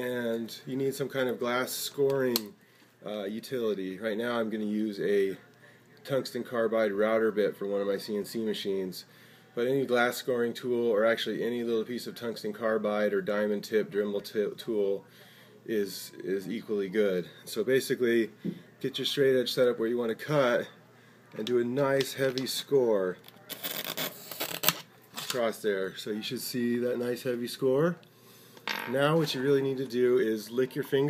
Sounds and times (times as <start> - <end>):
Speech: 0.0 - 23.6, 24.8 - 28.0, 28.9 - 31.0.